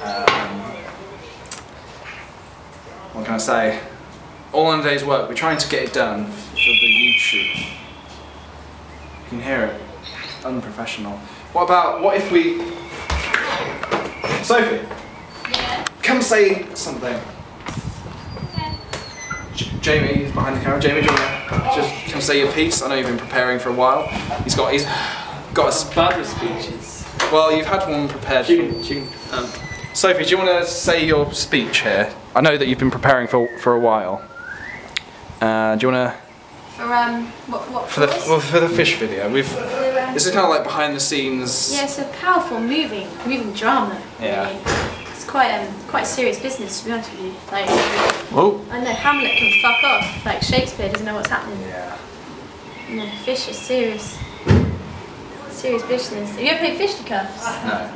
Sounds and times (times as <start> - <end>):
Conversation: 0.0 - 57.9.